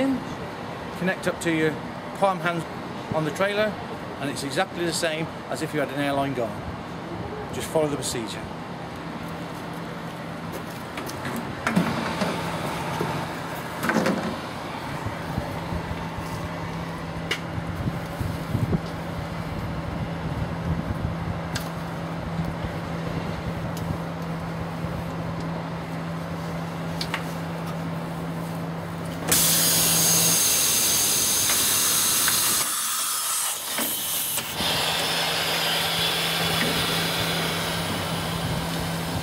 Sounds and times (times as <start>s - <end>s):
Speech: 1.0s - 6.6s, 7.2s - 8.5s.